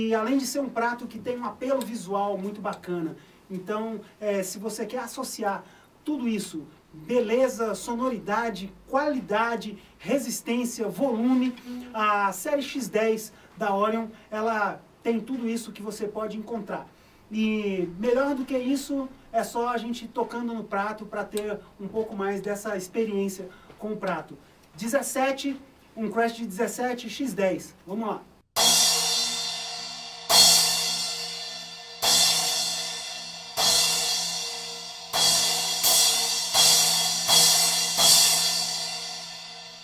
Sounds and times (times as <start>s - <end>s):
Speech: 0.0s - 28.3s.